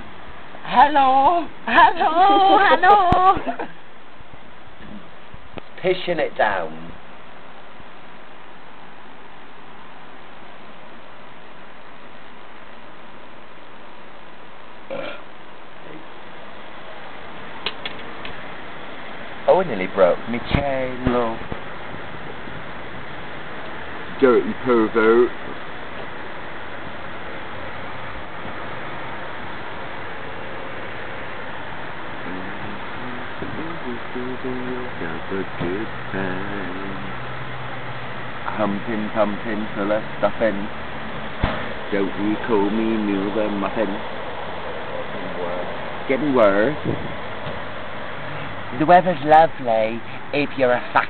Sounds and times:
Speech: 0:00.7 - 0:03.7, 0:19.5 - 0:21.4, 0:24.2 - 0:25.3, 0:32.3 - 0:37.1, 0:38.5 - 0:40.7, 0:41.9 - 0:44.0, 0:45.2 - 0:46.8, 0:48.8 - 0:51.1.

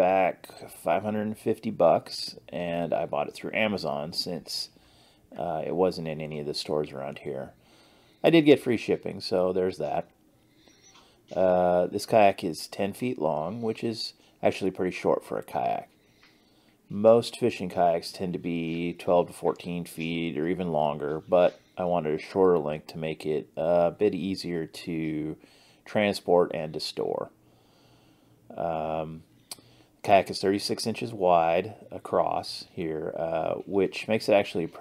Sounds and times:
Speech: 0:00.0 - 0:07.6, 0:08.2 - 0:10.1, 0:11.3 - 0:15.9, 0:16.9 - 0:27.3, 0:28.5 - 0:29.3, 0:30.0 - 0:34.8.

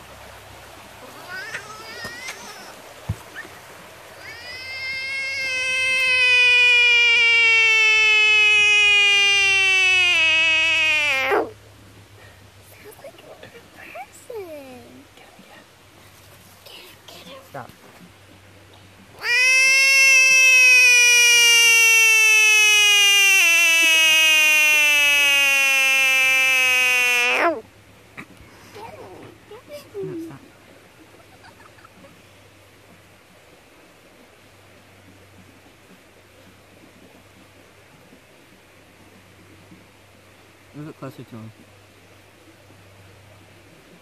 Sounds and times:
Frog: 0:01.0 - 0:02.8, 0:04.2 - 0:11.6, 0:19.2 - 0:27.7.

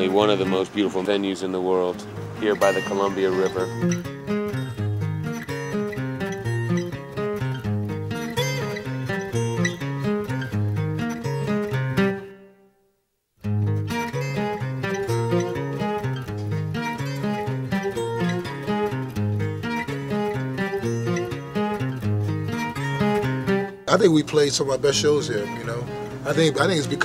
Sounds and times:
Music: 0:00.0 - 0:27.0.

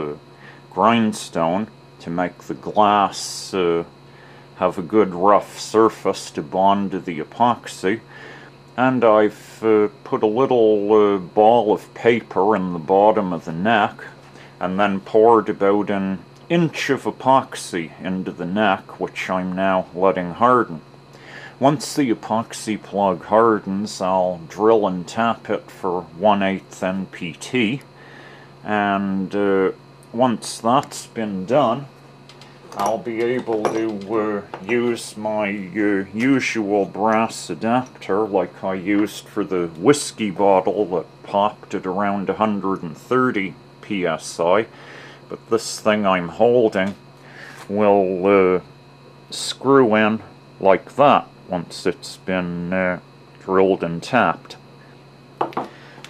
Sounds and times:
Speech: 0:00.0 - 0:03.9, 0:04.6 - 0:08.1, 0:08.8 - 0:20.8, 0:21.6 - 0:27.9, 0:28.6 - 0:31.9, 0:32.8 - 0:44.7, 0:45.3 - 0:47.0, 0:47.6 - 0:48.7, 0:49.3 - 0:54.6.

